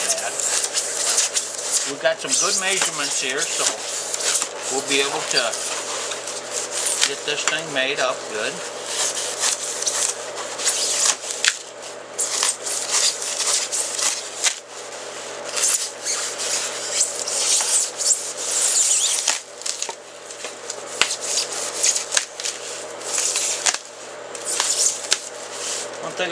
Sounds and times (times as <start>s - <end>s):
Inside, small room: 0.0s - 26.3s.